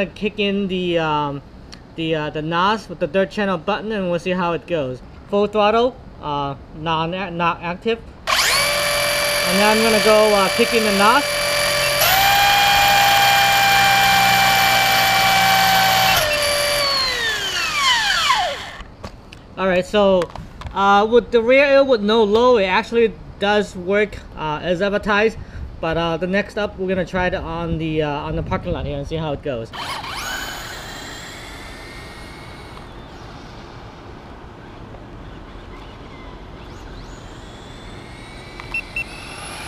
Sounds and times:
Speech: 0.0 - 1.4, 2.0 - 8.0, 9.5 - 11.3, 19.6 - 29.8.

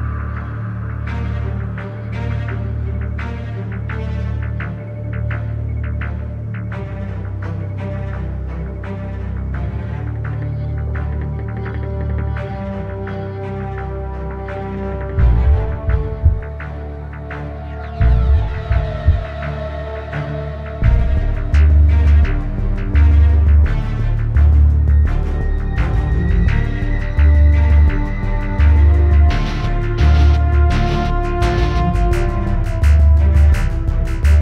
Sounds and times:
Background music: 0.0 - 34.4.

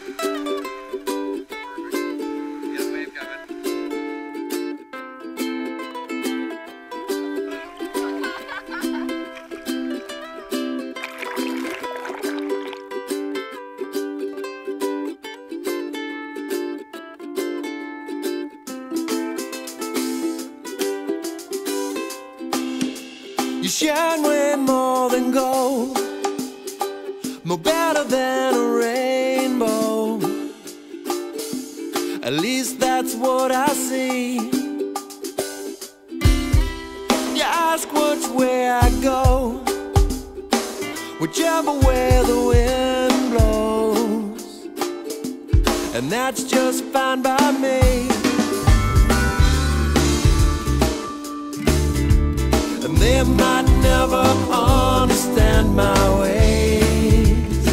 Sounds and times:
Blues: 0.0 - 57.7.

